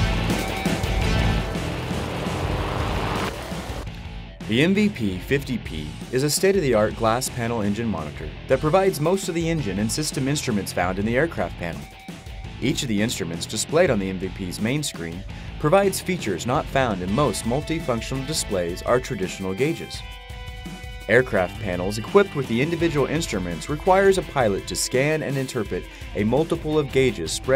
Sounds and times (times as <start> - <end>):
Music: 0.0 - 27.5
Speech: 4.5 - 11.9, 12.6 - 20.0, 21.1 - 27.5.